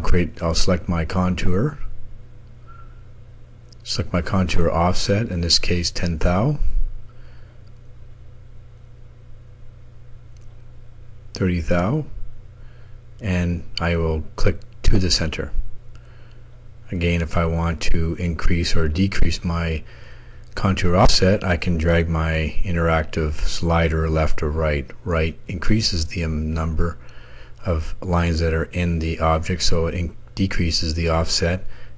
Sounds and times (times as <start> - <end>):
Speech: 0.0 - 1.9, 3.8 - 6.8, 11.4 - 12.2, 13.2 - 15.6, 16.9 - 19.9, 20.6 - 27.0, 27.6 - 31.7.